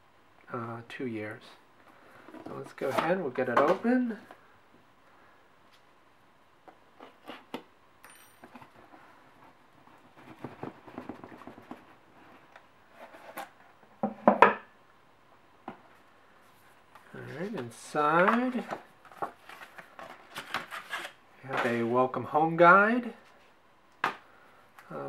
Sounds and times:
Speech: 0.5s - 1.6s, 2.5s - 4.3s, 17.1s - 18.7s, 21.4s - 23.2s, 24.9s - 25.0s.

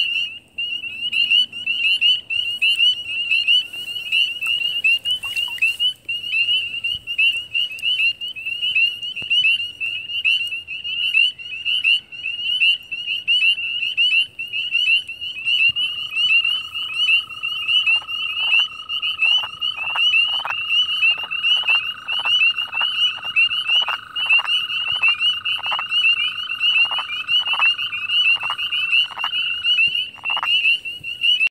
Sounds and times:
Frog: 0.0s - 31.5s.

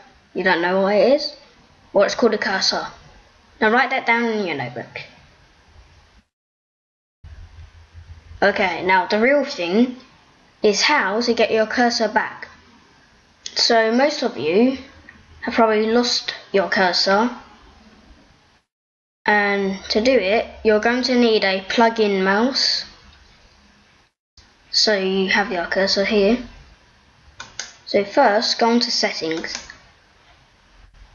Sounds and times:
Speech: 0.0s - 3.0s, 3.6s - 5.2s, 8.4s - 12.6s, 13.5s - 17.5s, 19.3s - 23.0s, 24.7s - 26.6s, 27.9s - 29.8s.

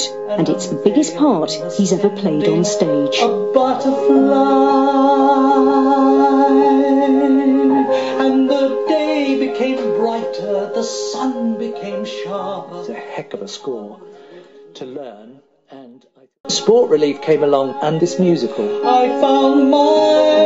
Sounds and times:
Speech: 0.0s - 3.4s, 14.8s - 18.7s
Music: 0.0s - 20.4s
Male singing: 0.3s - 14.0s, 16.5s - 20.4s.

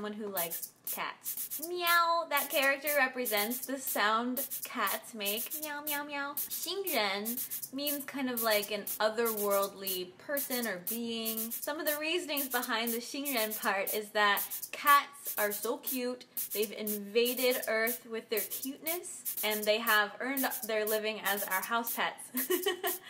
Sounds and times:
Speech: 0.0s - 22.3s.

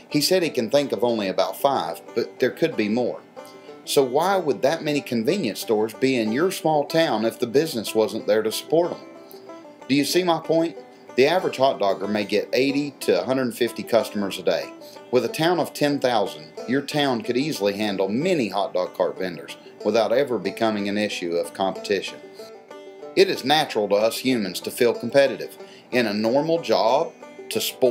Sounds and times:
Speech: 0.0s - 3.2s, 3.9s - 9.0s, 9.9s - 22.2s, 23.2s - 27.9s
Music: 0.0s - 27.9s.

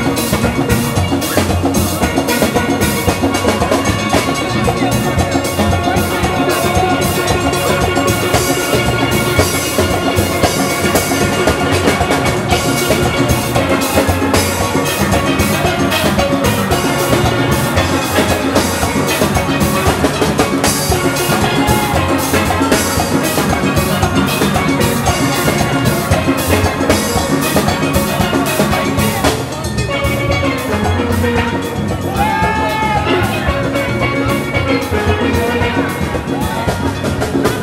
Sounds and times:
Drum: 0.0s - 37.6s
Steelpan: 0.0s - 37.6s.

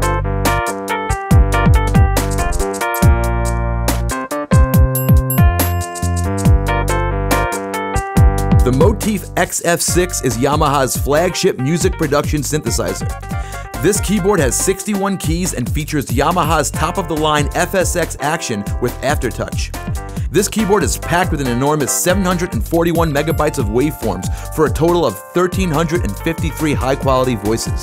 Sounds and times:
Music: 0.0s - 27.8s
Speech: 8.7s - 13.1s, 13.7s - 19.7s, 20.3s - 27.8s.

